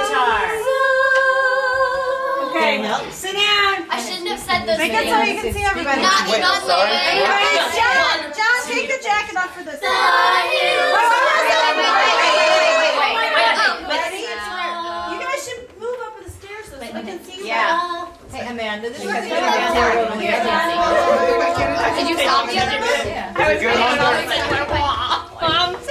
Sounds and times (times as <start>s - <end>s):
Speech: 2.4s - 25.9s.